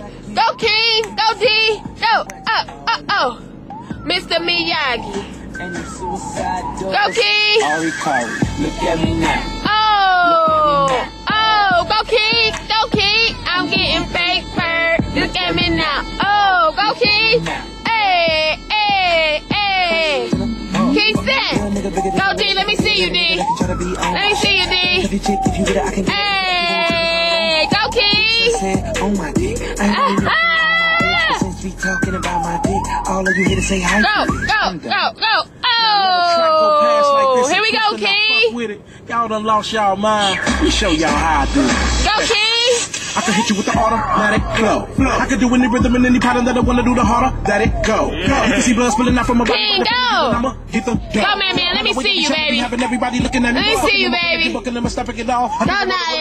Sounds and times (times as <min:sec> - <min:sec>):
Music: 0:00.0 - 0:34.8, 0:40.3 - 0:56.2
Motor vehicle (road): 0:00.0 - 0:56.2.